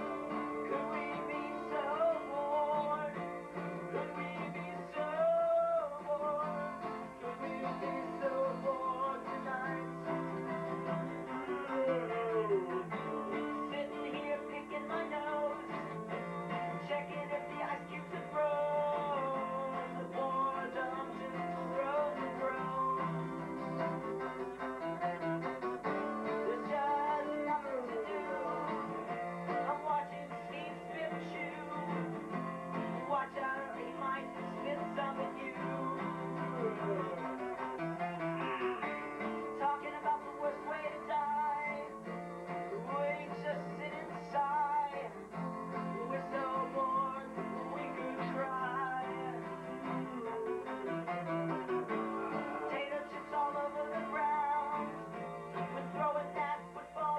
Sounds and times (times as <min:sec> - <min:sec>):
Music: 0:00.0 - 0:57.1.